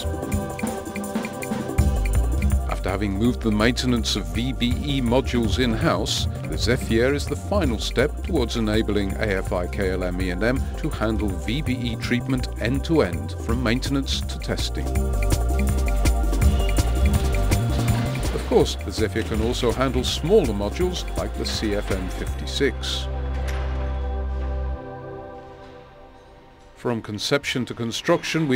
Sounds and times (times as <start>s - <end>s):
Music: 0.0s - 28.5s
Speech: 2.7s - 14.9s, 18.4s - 23.1s, 26.8s - 28.5s.